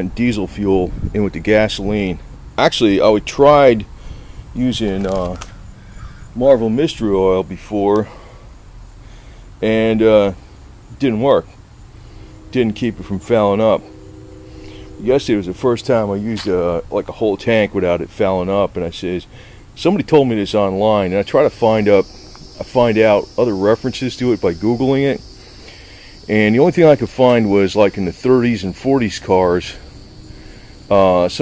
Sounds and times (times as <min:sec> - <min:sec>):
Speech: 0:00.0 - 0:03.9, 0:04.6 - 0:05.4, 0:06.4 - 0:08.1, 0:09.6 - 0:10.4, 0:11.0 - 0:11.5, 0:12.5 - 0:13.8, 0:15.0 - 0:25.2, 0:26.3 - 0:29.8, 0:30.9 - 0:31.4.